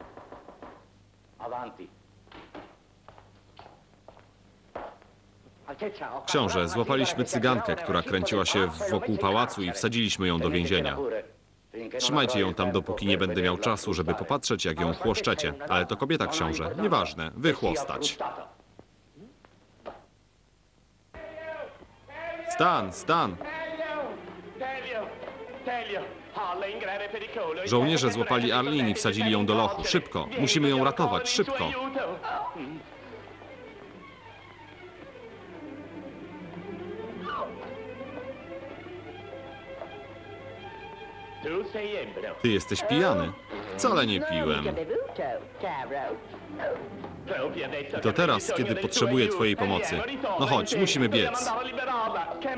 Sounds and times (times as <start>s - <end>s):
Speech: 1.4s - 2.0s, 5.7s - 18.6s, 21.2s - 32.8s, 41.4s - 52.5s.